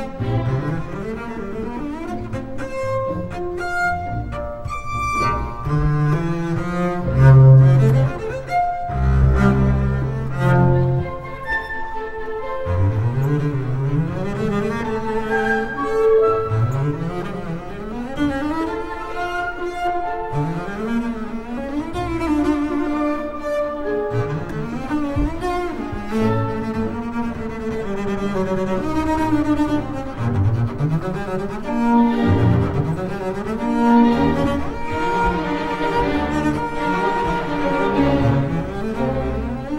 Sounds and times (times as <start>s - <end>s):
Cello: 0.0s - 39.7s
Double bass: 0.0s - 39.7s.